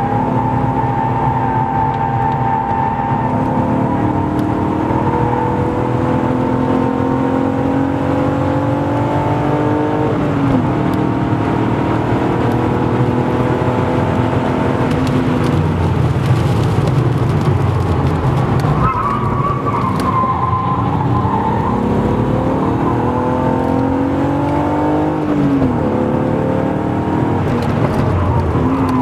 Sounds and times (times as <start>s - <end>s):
Accelerating, revving, vroom: 0.0s - 15.6s, 19.6s - 29.0s
Car: 0.0s - 29.0s.